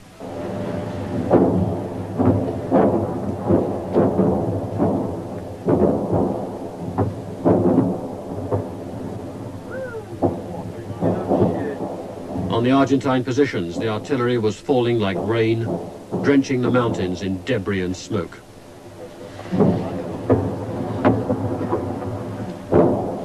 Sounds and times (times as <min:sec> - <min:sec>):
Outside, rural or natural: 0:00.0 - 0:23.2
Speech: 0:09.7 - 0:11.8, 0:12.5 - 0:18.4.